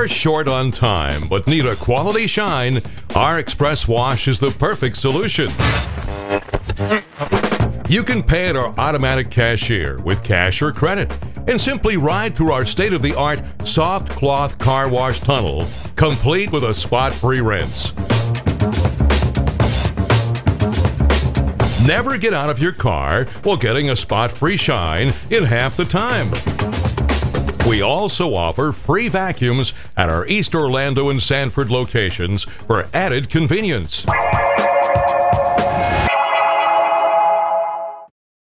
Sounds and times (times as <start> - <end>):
Speech: 0.0 - 5.6, 7.9 - 18.0, 21.8 - 26.4, 27.6 - 34.1
Music: 0.0 - 38.1.